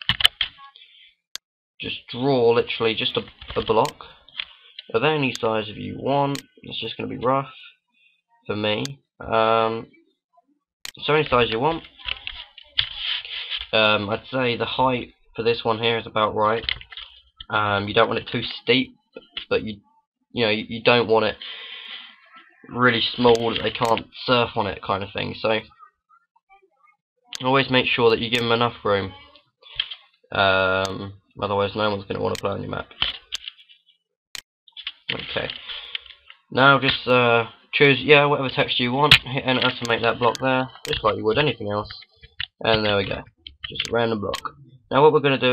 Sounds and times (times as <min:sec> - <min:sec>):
Speech: 0:01.8 - 0:04.2, 0:04.9 - 0:07.8, 0:08.4 - 0:10.1, 0:10.9 - 0:16.8, 0:17.4 - 0:21.4, 0:22.1 - 0:33.1, 0:35.1 - 0:35.6, 0:36.5 - 0:45.5.